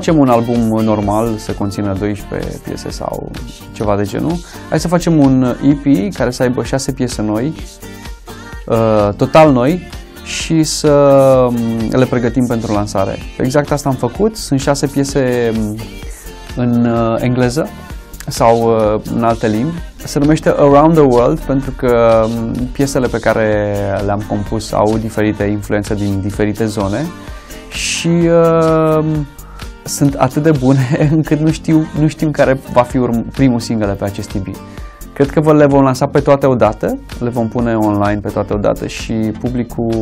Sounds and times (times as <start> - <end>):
Speech: 0.0 - 7.7, 8.7 - 15.9, 16.6 - 27.1, 27.7 - 29.3, 29.9 - 34.6, 35.2 - 40.0
Music: 0.0 - 40.0.